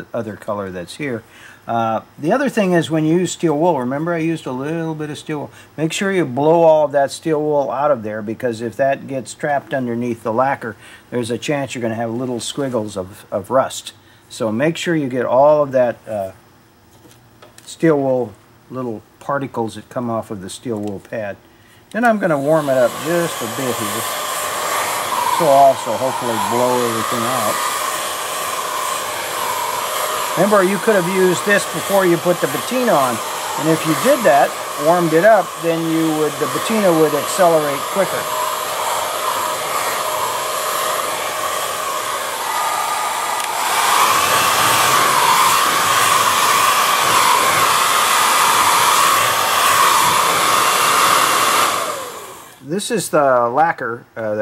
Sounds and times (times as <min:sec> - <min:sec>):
Speech: 0:00.0 - 0:16.4, 0:17.6 - 0:24.1, 0:25.4 - 0:27.6, 0:30.4 - 0:38.3, 0:52.6 - 0:54.4.